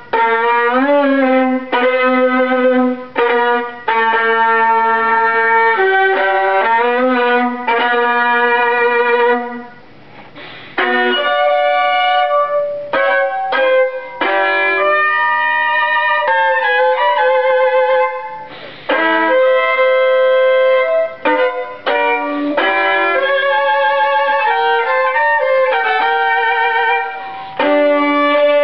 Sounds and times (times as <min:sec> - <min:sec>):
Violin, fiddle: 0:00.0 - 0:09.8, 0:10.4 - 0:28.6.